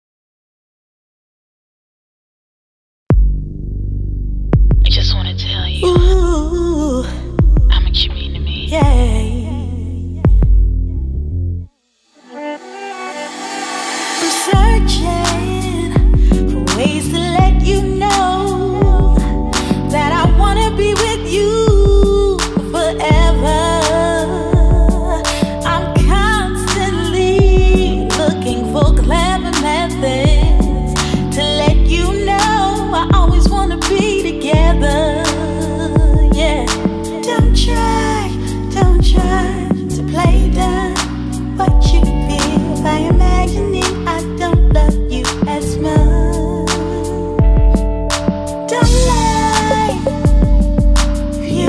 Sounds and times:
Background music: 12.2s - 51.6s.

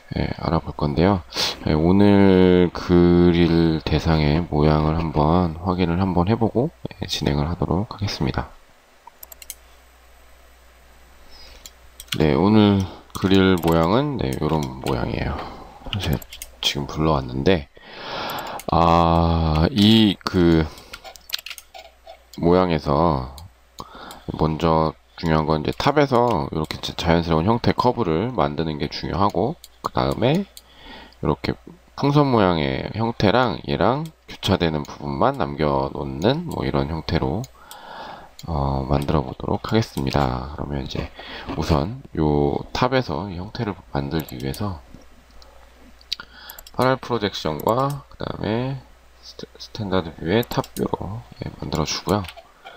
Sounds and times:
Speech: 0.1s - 8.6s, 12.1s - 17.7s, 18.7s - 20.8s, 22.4s - 23.5s, 24.3s - 30.5s, 31.2s - 37.5s, 38.4s - 45.0s, 46.8s - 52.4s.

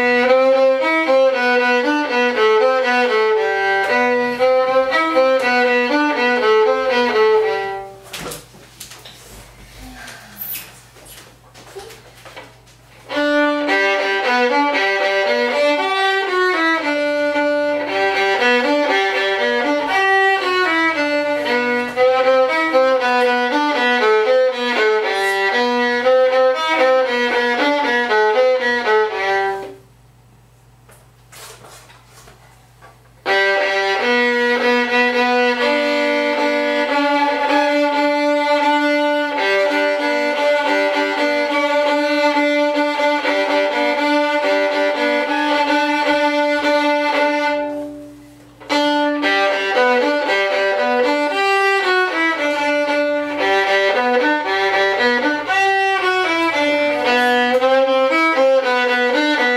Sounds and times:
Violin, fiddle: 0.0s - 8.0s, 13.1s - 29.8s, 33.2s - 59.5s.

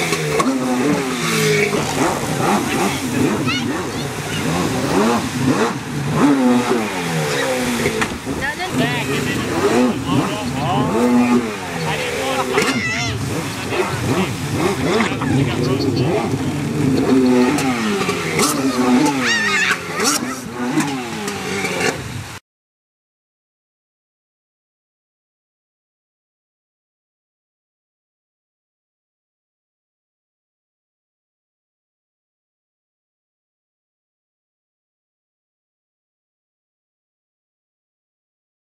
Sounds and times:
Motorboat, speedboat: 0.0s - 22.4s
Speech: 8.4s - 14.1s, 14.9s - 16.7s.

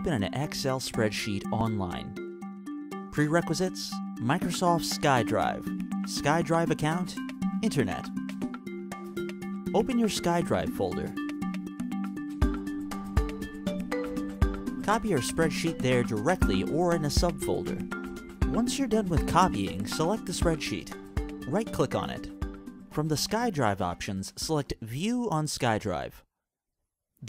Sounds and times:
Narration, monologue: 0.0s - 26.3s.

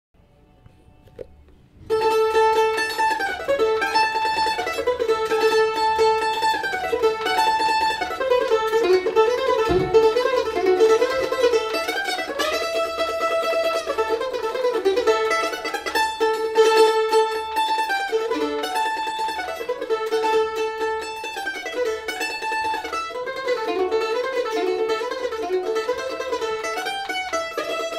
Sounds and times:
Mandolin: 0.2s - 27.9s
Bluegrass: 0.6s - 27.9s.

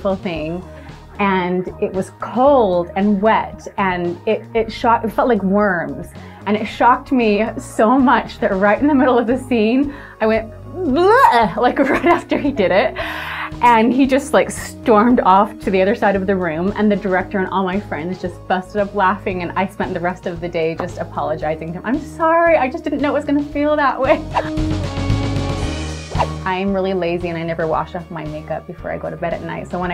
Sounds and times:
Speech: 0.0s - 0.6s, 1.2s - 24.5s, 26.5s - 29.9s
Music: 0.0s - 29.9s.

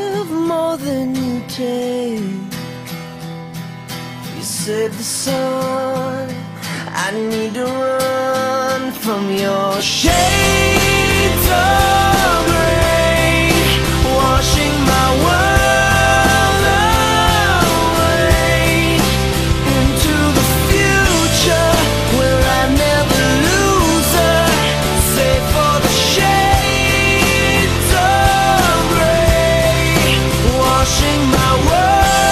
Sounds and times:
Music: 0.0s - 32.3s.

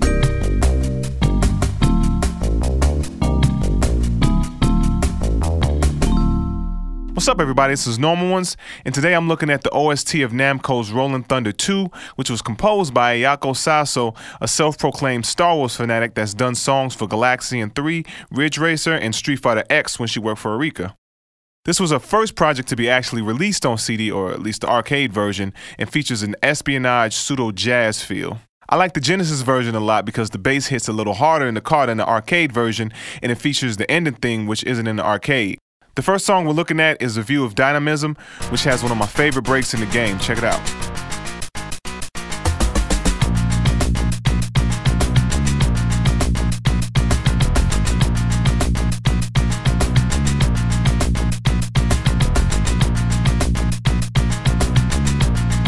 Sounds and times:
Speech: 7.2s - 21.0s, 21.7s - 40.7s.

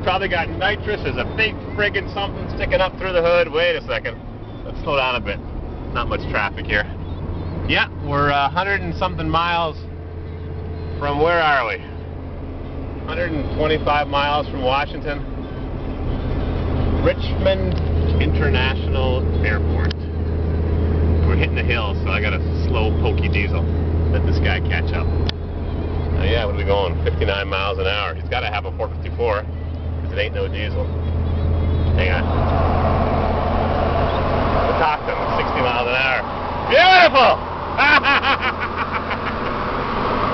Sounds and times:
Speech: 0.0s - 7.0s, 7.7s - 9.9s, 11.0s - 11.9s, 13.1s - 15.2s, 17.0s - 20.0s, 21.2s - 25.1s, 26.2s - 29.4s, 30.0s - 30.9s, 32.0s - 32.3s, 34.7s - 37.4s
Car: 0.0s - 40.3s
Outside, urban or manmade: 0.0s - 40.3s.

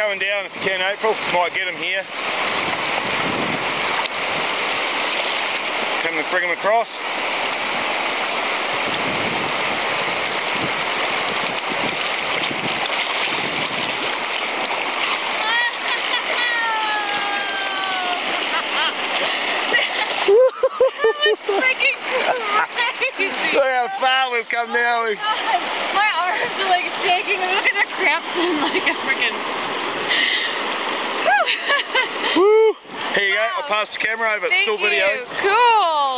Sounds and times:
Stream: 0.0s - 36.1s.

